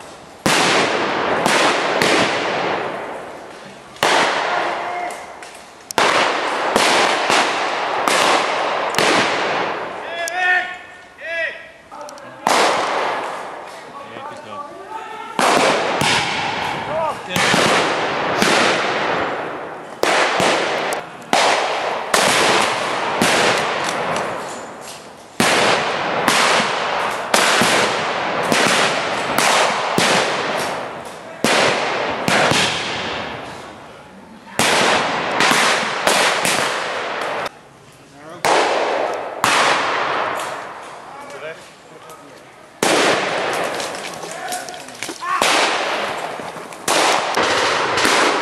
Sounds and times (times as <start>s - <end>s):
Firecracker: 0.0s - 10.1s, 12.4s - 13.9s, 15.3s - 33.8s, 34.4s - 37.5s, 38.4s - 41.8s, 42.8s - 48.4s.